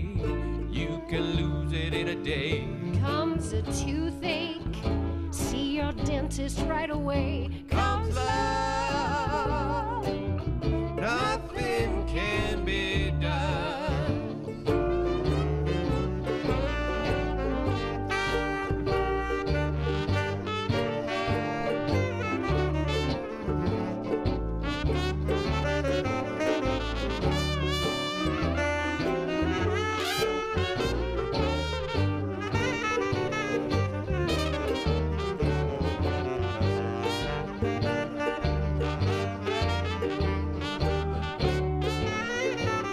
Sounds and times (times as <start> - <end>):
Jazz: 0.0 - 42.9
Musical instrument: 0.0 - 42.9.